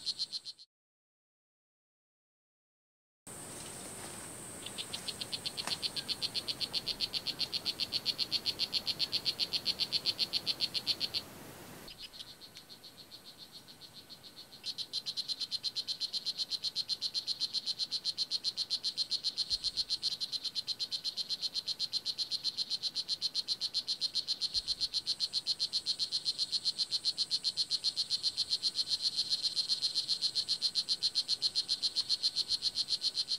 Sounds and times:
Frog: 0.0 - 0.7, 3.8 - 33.3.

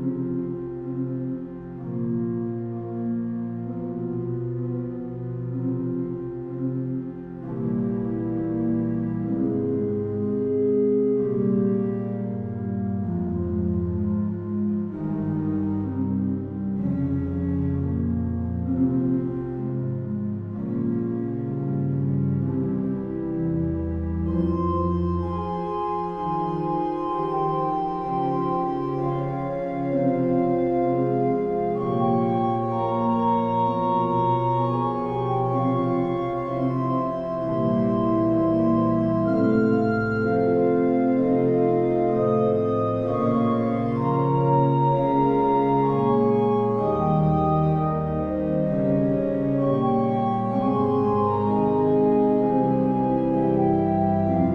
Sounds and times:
Organ: 0.0 - 54.5.

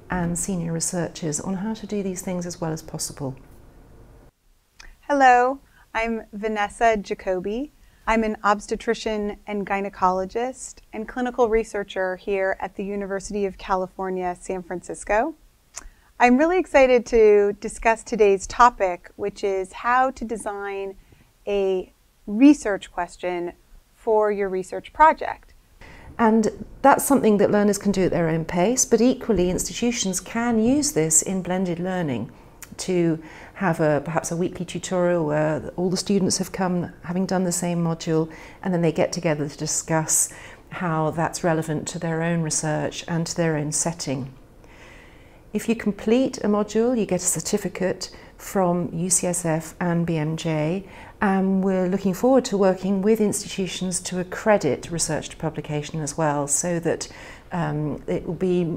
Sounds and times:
Speech: 0.1 - 3.4, 4.8 - 25.5, 26.2 - 44.4, 45.6 - 58.7.

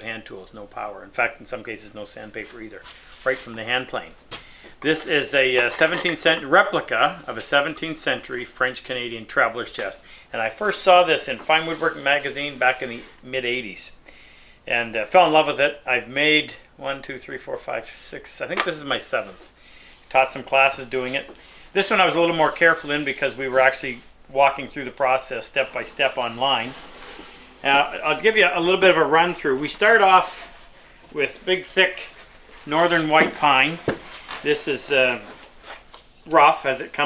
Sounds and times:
Speech: 0.0 - 4.2, 4.8 - 14.0, 14.7 - 19.5, 20.1 - 26.8, 27.6 - 30.5, 31.1 - 35.4, 36.2 - 37.0.

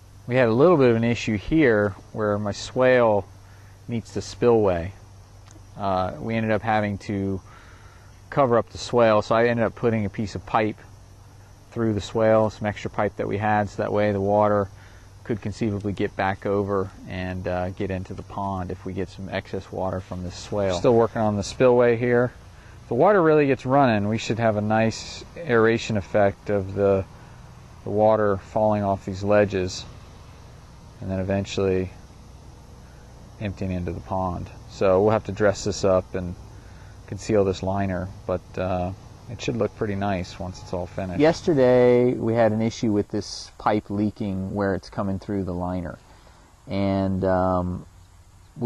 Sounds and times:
Speech: 0.3 - 3.3, 3.9 - 5.0, 5.8 - 7.4, 8.3 - 10.8, 11.8 - 14.7, 15.3 - 27.1, 27.9 - 29.9, 31.0 - 32.0, 33.4 - 36.4, 37.1 - 46.0, 46.7 - 47.9.

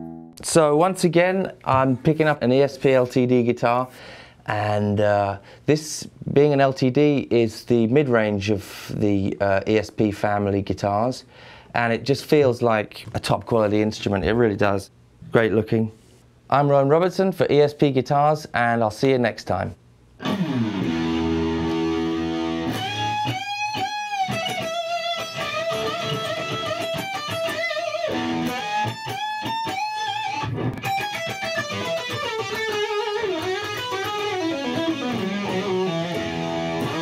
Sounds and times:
Electric guitar: 20.2 - 37.0
Rock music: 20.2 - 37.0.

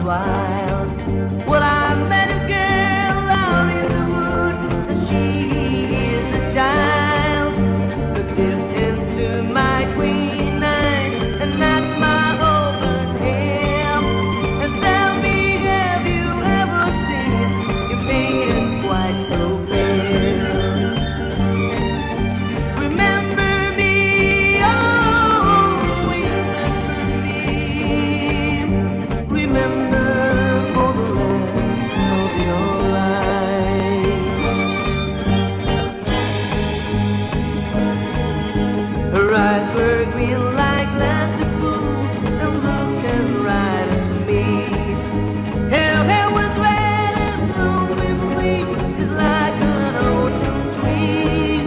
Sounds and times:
Music: 0.0 - 51.6.

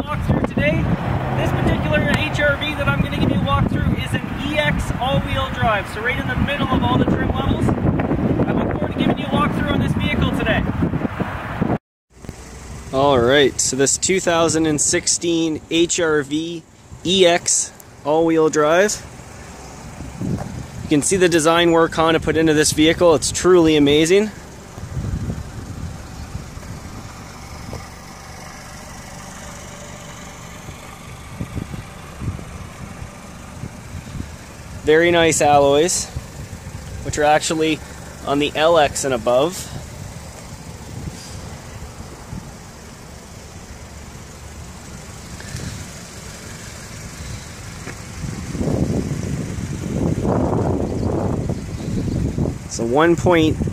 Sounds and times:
Speech: 0.0 - 7.7, 8.4 - 10.7, 12.9 - 19.1, 20.9 - 24.4, 34.8 - 36.2, 37.0 - 39.8, 52.7 - 53.6
Car: 0.0 - 53.7.

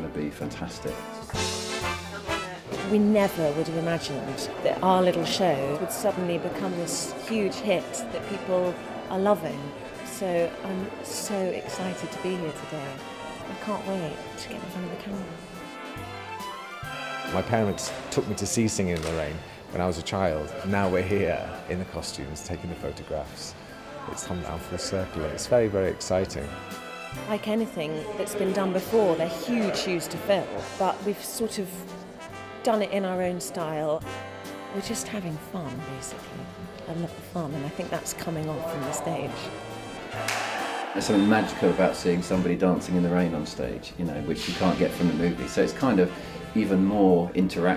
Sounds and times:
Music: 0.0 - 47.7.

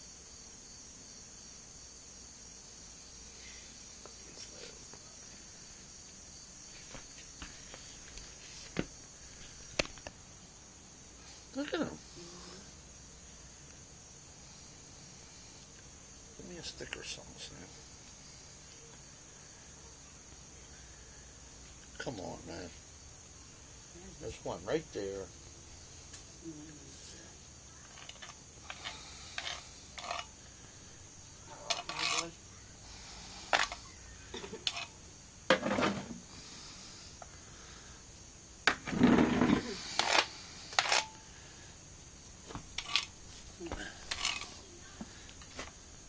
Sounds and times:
Snake: 0.0 - 46.0.

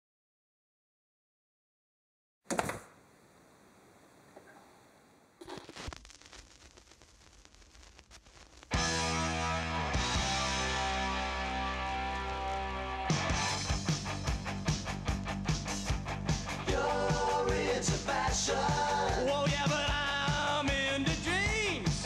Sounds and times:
Music: 8.8 - 22.0.

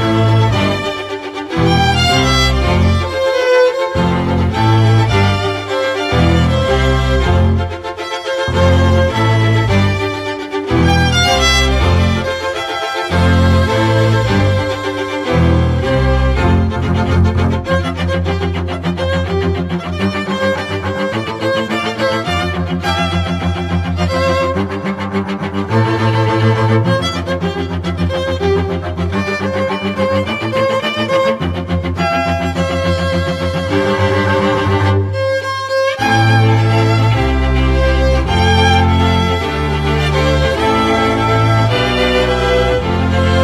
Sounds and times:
Cello: 0.0 - 43.4
Violin, fiddle: 0.0 - 43.4.

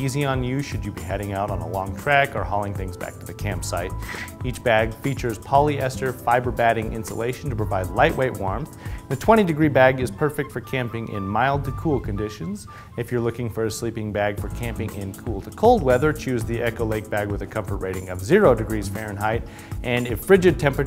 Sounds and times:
Music: 0.0 - 20.8
Speech: 0.0 - 20.8.

